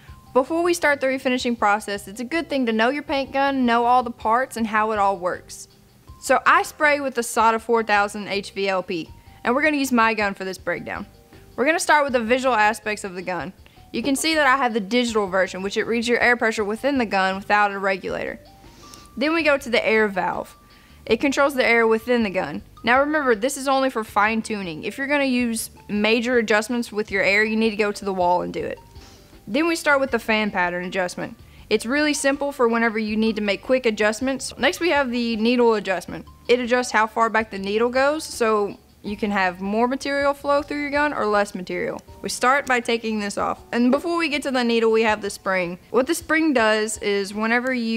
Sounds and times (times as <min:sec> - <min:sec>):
Music: 0:00.0 - 0:47.9
Speech: 0:00.4 - 0:05.7, 0:06.3 - 0:18.4, 0:21.1 - 0:28.8, 0:29.5 - 0:47.9.